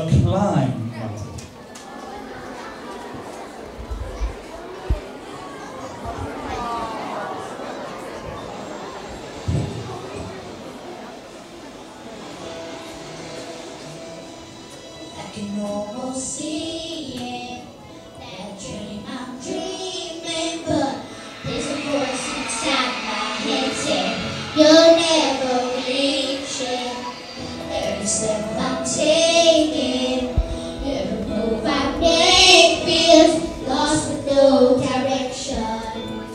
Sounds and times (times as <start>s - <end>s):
Music: 8.0s - 36.3s
Child singing: 15.2s - 36.3s.